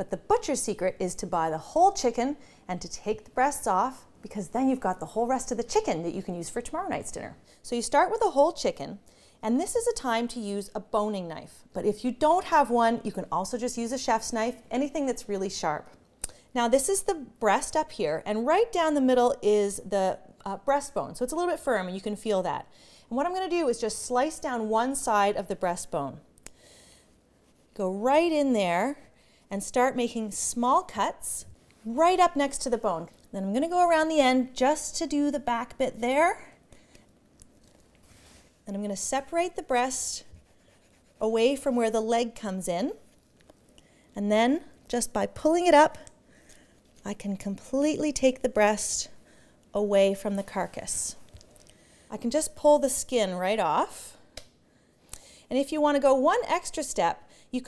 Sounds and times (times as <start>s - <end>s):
Speech: 0.0s - 16.0s, 16.6s - 26.2s, 27.8s - 36.5s, 38.7s - 40.3s, 41.2s - 43.0s, 44.2s - 46.1s, 47.0s - 49.2s, 49.8s - 51.2s, 52.1s - 54.2s, 55.5s - 57.6s.